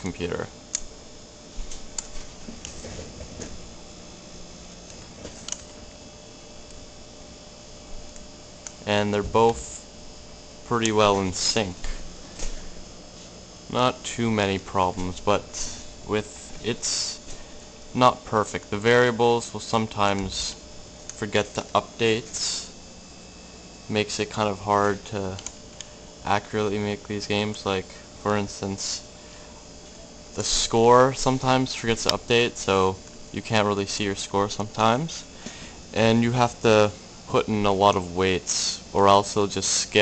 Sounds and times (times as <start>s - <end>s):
Speech: 0.0s - 0.6s, 8.8s - 9.9s, 10.7s - 12.0s, 13.7s - 17.3s, 17.9s - 20.6s, 21.2s - 22.8s, 23.9s - 25.5s, 26.2s - 29.1s, 30.4s - 35.3s, 35.9s - 40.0s.